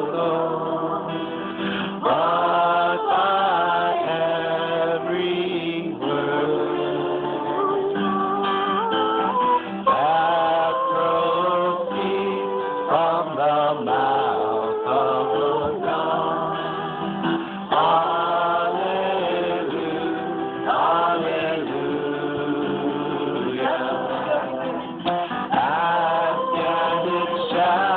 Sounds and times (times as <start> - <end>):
Chant: 0.0 - 27.9
Guitar: 0.0 - 27.9.